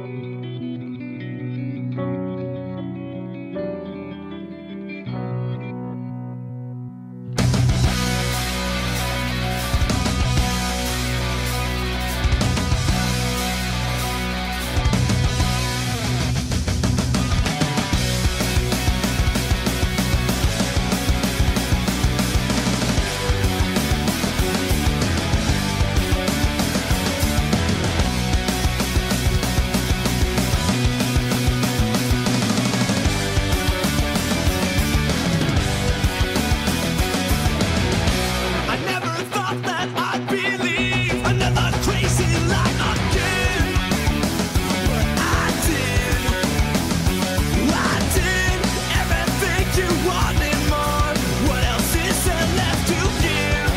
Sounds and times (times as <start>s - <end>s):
Bass guitar: 0.0s - 53.7s.